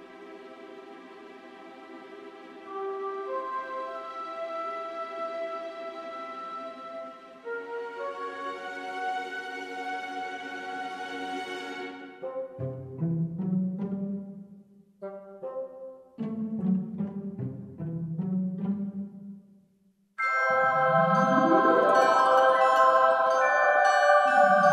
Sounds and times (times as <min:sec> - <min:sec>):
Soundtrack music: 0:20.3 - 0:24.7.